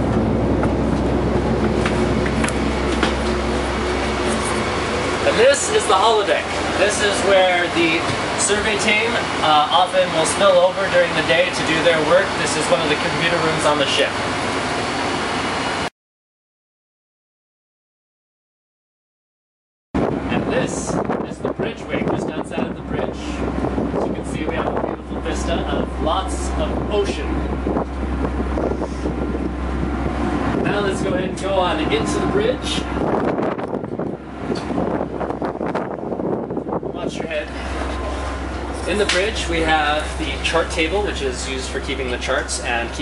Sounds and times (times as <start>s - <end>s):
Boat, Water vehicle: 0.0s - 15.9s, 20.0s - 43.0s
Wind noise (microphone): 20.0s - 38.0s.